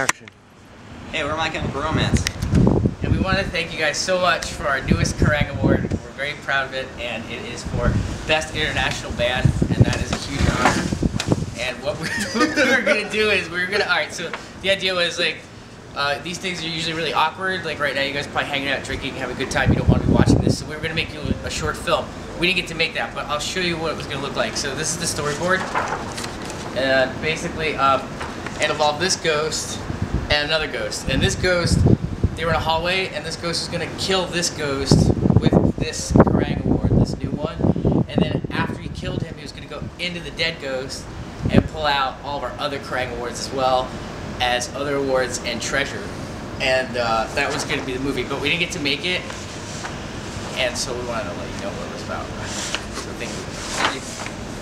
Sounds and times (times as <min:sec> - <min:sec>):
Male speech, man speaking: 0:00.0 - 0:00.3, 0:01.1 - 0:02.3, 0:03.0 - 0:10.9, 0:11.6 - 0:15.4, 0:16.0 - 0:25.8, 0:26.8 - 0:49.4, 0:50.5 - 0:54.1
Narration, monologue: 0:00.0 - 0:54.6.